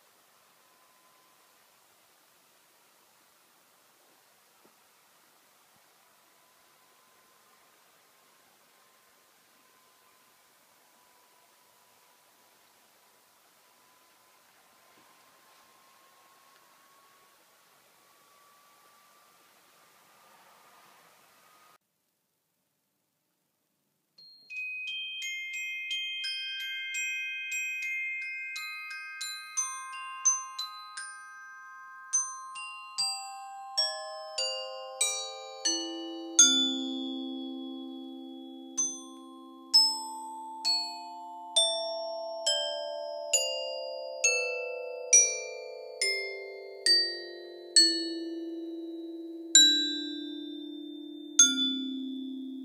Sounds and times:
Glockenspiel: 0:00.0 - 0:03.3, 0:04.0 - 0:20.8, 0:24.2 - 0:52.6
Marimba, xylophone: 0:24.2 - 0:52.6.

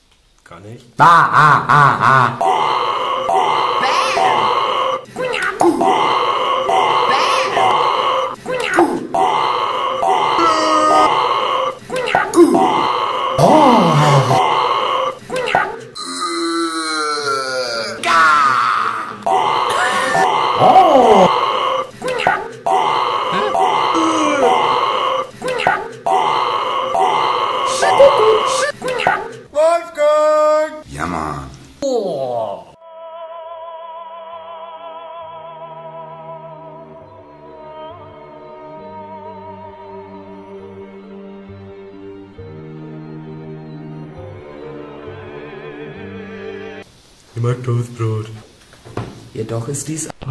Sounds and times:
Burping, eructation: 0:12.4 - 0:15.2, 0:16.0 - 0:18.1.

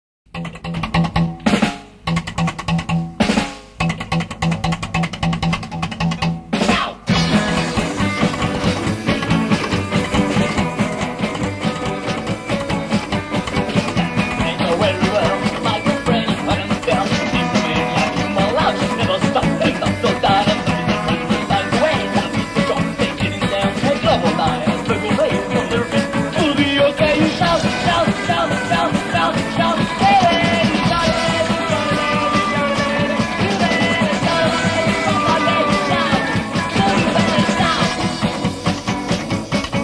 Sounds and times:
Drum kit: 0:00.3 - 0:39.8
Drum roll: 0:00.3 - 0:39.8
Rimshot: 0:06.6 - 0:11.4.

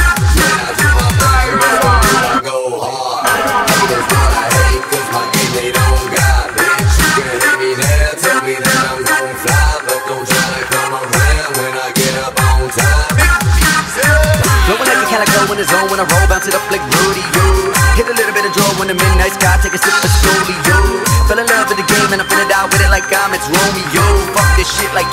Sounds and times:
Dubstep: 0:00.0 - 0:02.4, 0:03.2 - 0:25.1.

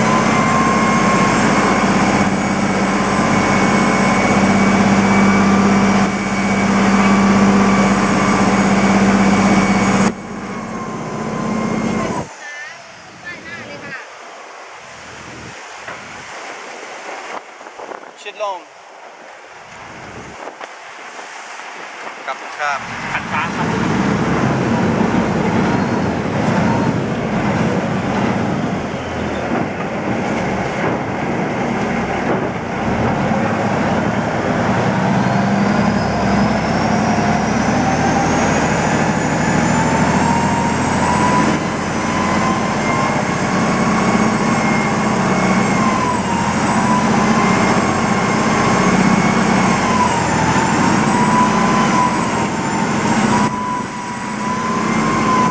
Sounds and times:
Motorboat, speedboat: 0:00.0 - 0:55.5
Speech: 0:12.4 - 0:14.1, 0:18.2 - 0:18.7, 0:22.3 - 0:23.6.

